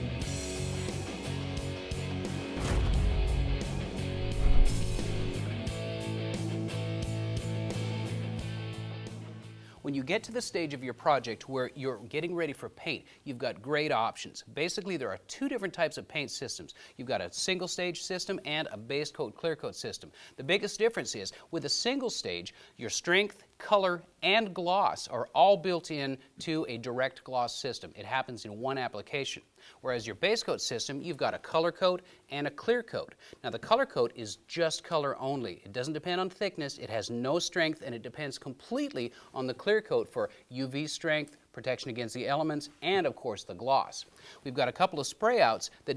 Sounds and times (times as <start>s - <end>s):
Speech: 9.8s - 45.9s.